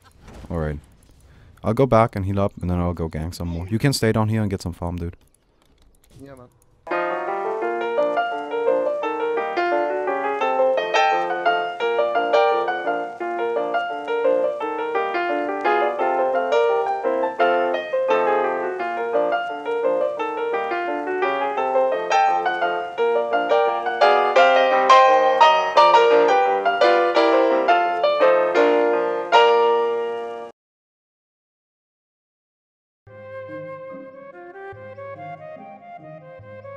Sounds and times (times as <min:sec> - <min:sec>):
Keyboard (musical): 0:06.9 - 0:30.5, 0:33.1 - 0:36.7.